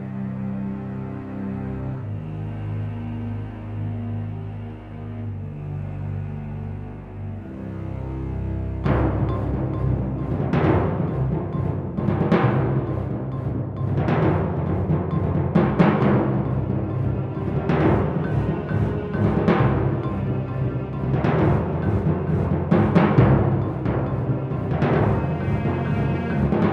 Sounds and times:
Timpani: 7.4 - 26.7.

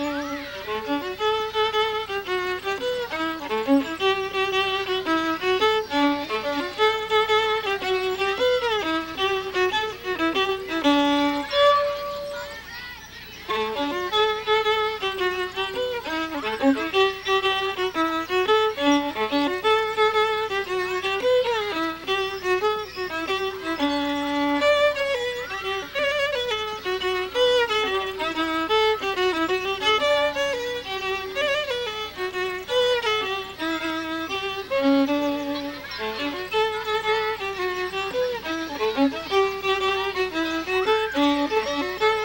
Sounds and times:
Speech: 0.0 - 1.2, 9.7 - 17.5, 25.1 - 26.6, 35.0 - 42.2
Violin, fiddle: 0.0 - 42.2.

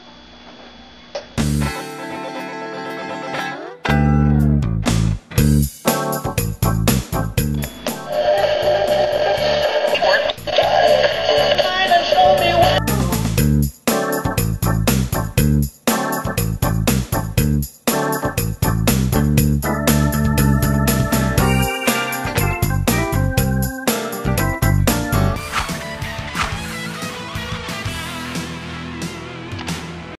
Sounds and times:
Music: 1.4 - 30.1.

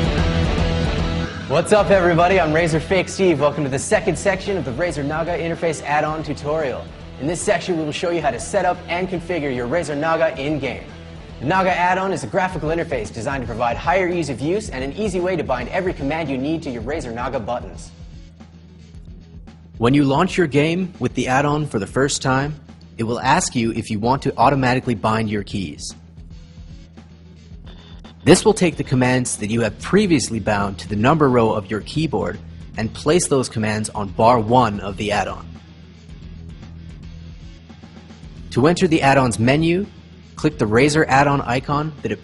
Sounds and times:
Music: 0.0 - 42.2
Speech: 1.5 - 17.9, 19.8 - 26.0, 28.2 - 35.5, 38.5 - 42.2.

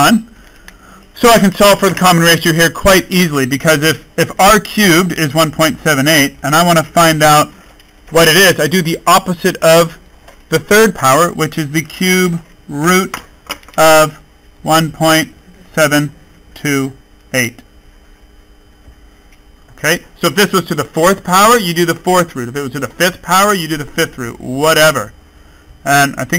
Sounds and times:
Speech: 0.0 - 0.3, 1.2 - 7.5, 8.1 - 13.2, 13.8 - 17.6, 19.8 - 25.1, 25.8 - 26.3
Inside, small room: 0.0 - 26.3.

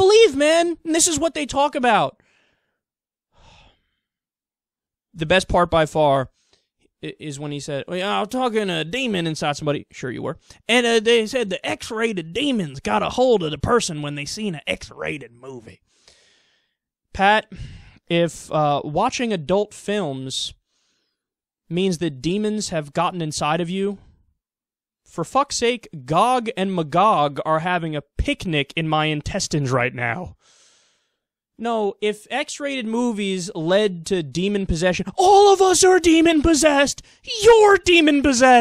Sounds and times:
Speech: 0.0 - 2.2, 5.2 - 6.3, 7.0 - 15.8, 17.1 - 20.6, 21.7 - 24.1, 25.1 - 30.4, 31.6 - 38.6.

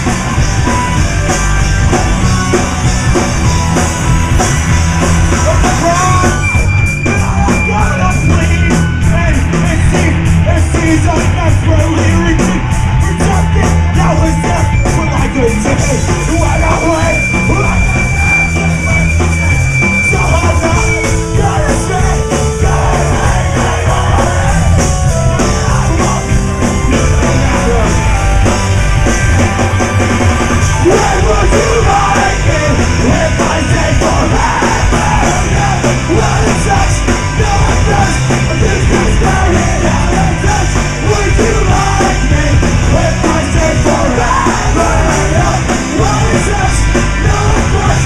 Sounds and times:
Soundtrack music: 0.0 - 48.0.

